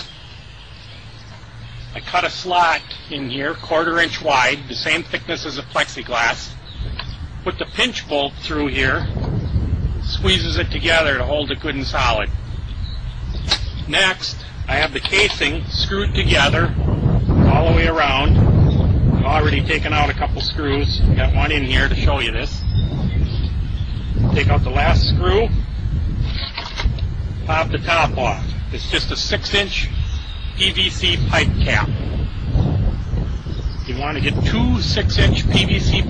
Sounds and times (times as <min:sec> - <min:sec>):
Speech: 0:02.0 - 0:06.6, 0:07.5 - 0:09.1, 0:10.0 - 0:12.3, 0:13.9 - 0:16.8, 0:17.4 - 0:18.4, 0:19.2 - 0:22.6, 0:24.2 - 0:25.6, 0:27.5 - 0:30.0, 0:30.6 - 0:32.0, 0:33.9 - 0:36.1.